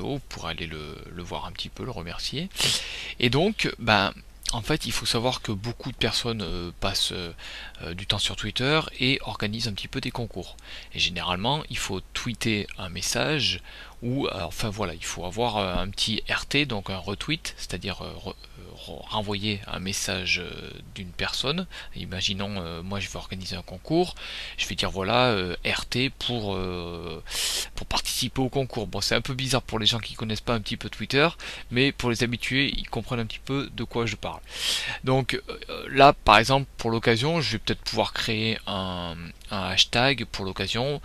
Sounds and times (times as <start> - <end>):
Speech: 0.0 - 34.4, 35.0 - 41.0.